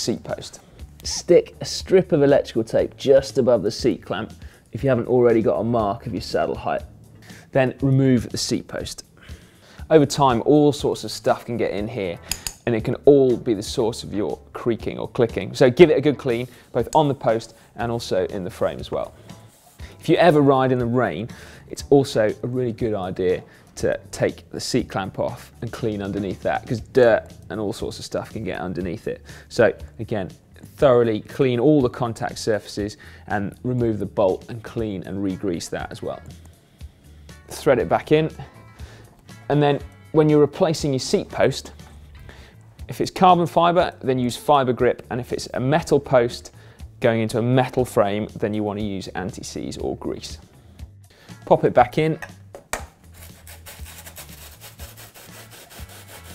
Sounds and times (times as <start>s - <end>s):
Speech: 0.0s - 6.9s, 7.5s - 9.1s, 9.9s - 19.2s, 20.0s - 36.3s, 37.5s - 38.5s, 39.5s - 41.8s, 42.9s - 50.4s, 51.5s - 52.4s
Music: 0.0s - 56.3s.